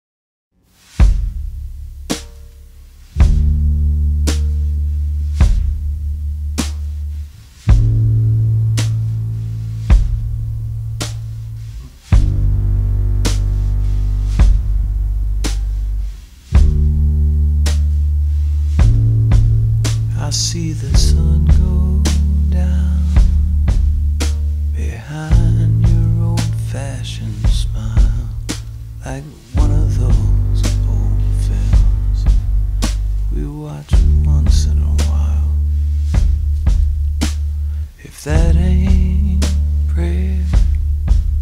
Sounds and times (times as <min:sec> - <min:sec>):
Music: 0:00.6 - 0:41.4.